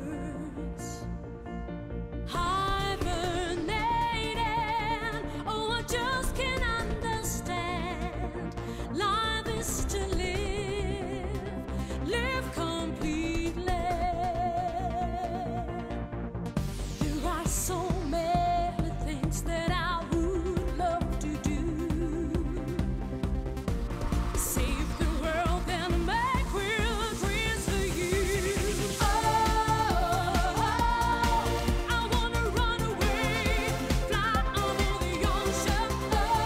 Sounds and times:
Music: 0.0s - 36.4s.

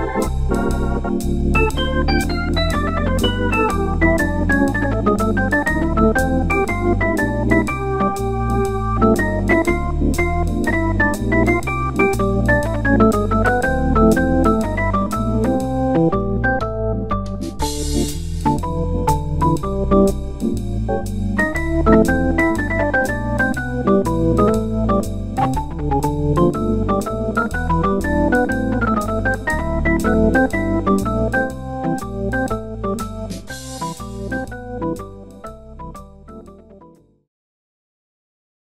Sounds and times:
Organ: 0.0s - 37.0s
Synthesizer: 0.0s - 37.1s
Piano: 0.0s - 37.3s.

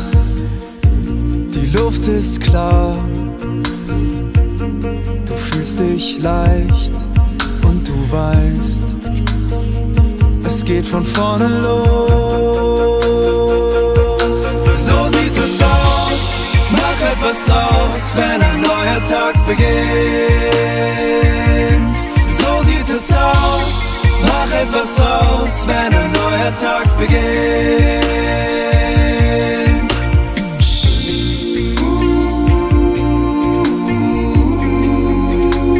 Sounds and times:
Soul music: 0.0s - 35.7s
Vocal music: 0.0s - 35.7s.

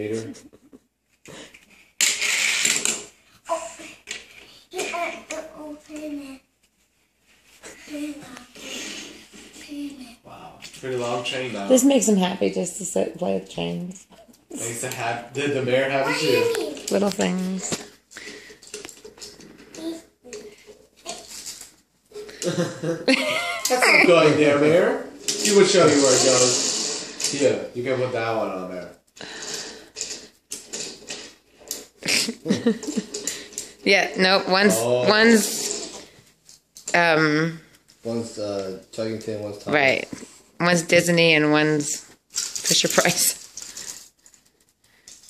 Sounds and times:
Breathing: 18.1s - 19.0s, 29.2s - 30.3s, 33.2s - 33.9s, 43.6s - 45.2s.

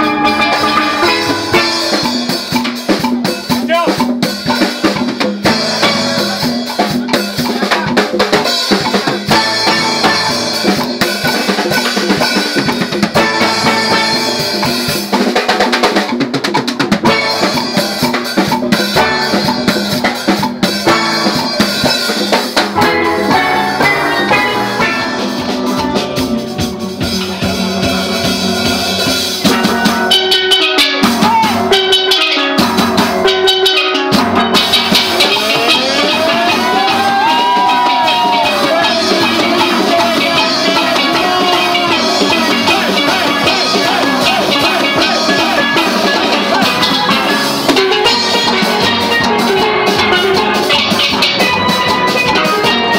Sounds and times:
Steelpan: 0.0s - 16.2s, 17.0s - 52.9s
Drum: 0.0s - 52.9s.

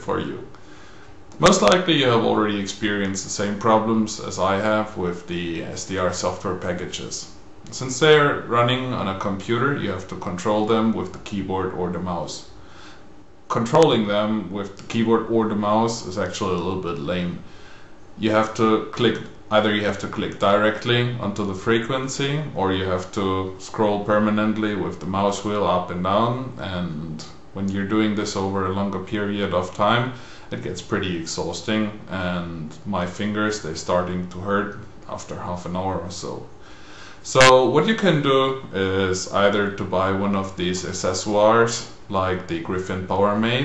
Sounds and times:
Speech: 0.0s - 0.6s, 1.4s - 12.6s, 13.5s - 17.5s, 18.2s - 36.5s, 37.2s - 43.6s.

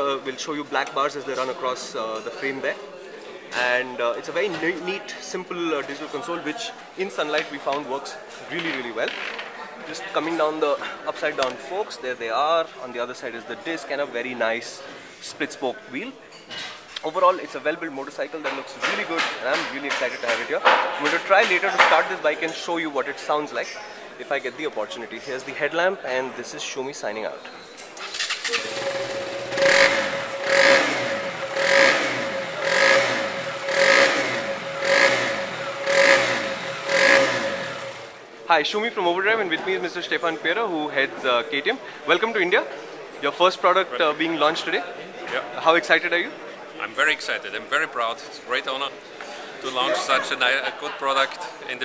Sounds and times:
Motorcycle: 28.1s - 38.2s.

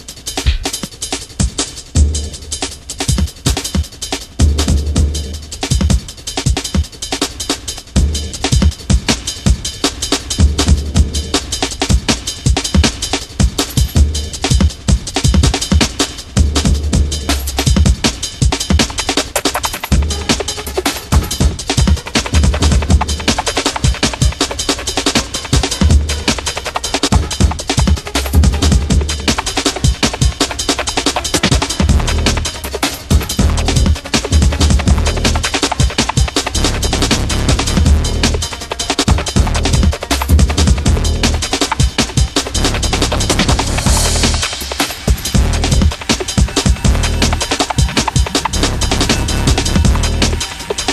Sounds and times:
Music: 0.0s - 50.9s.

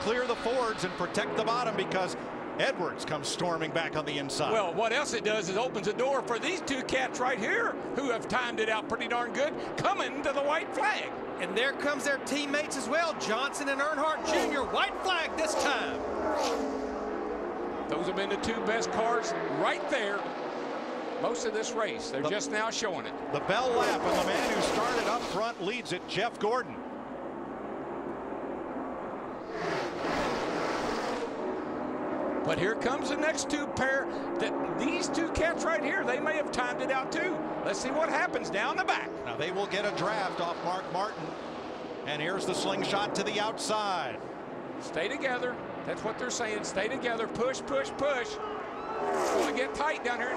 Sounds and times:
Speech: 0.0s - 16.0s, 17.9s - 20.2s, 21.2s - 26.8s, 32.5s - 41.3s, 42.1s - 44.2s, 44.8s - 48.4s, 49.4s - 50.3s
Race car, auto racing: 0.0s - 50.3s.

